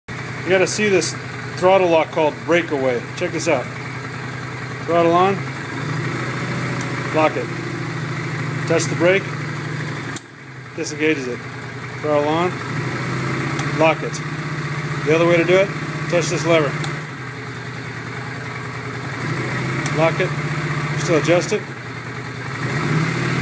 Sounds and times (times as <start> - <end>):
Motorcycle: 0.1 - 23.4
Speech: 0.5 - 3.7, 4.9 - 5.4, 7.1 - 7.5, 8.7 - 9.3, 10.8 - 11.4, 12.0 - 12.6, 13.8 - 14.2, 15.0 - 16.8, 19.9 - 20.4, 21.0 - 21.7.